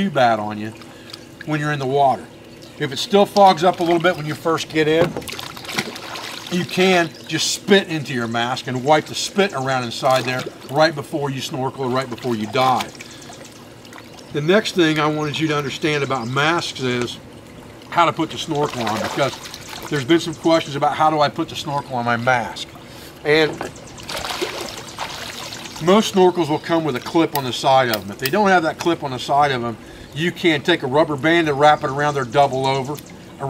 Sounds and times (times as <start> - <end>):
Speech: 0.0 - 0.8, 1.5 - 5.1, 6.5 - 13.0, 14.4 - 17.2, 17.9 - 23.7, 25.8 - 33.4.